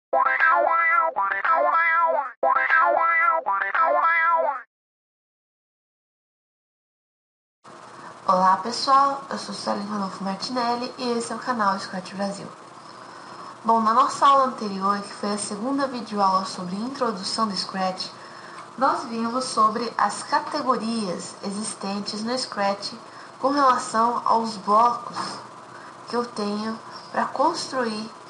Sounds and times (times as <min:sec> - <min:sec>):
Music: 0:00.2 - 0:04.4
Speech: 0:08.3 - 0:12.6, 0:13.6 - 0:18.2, 0:18.8 - 0:25.5, 0:26.1 - 0:28.2.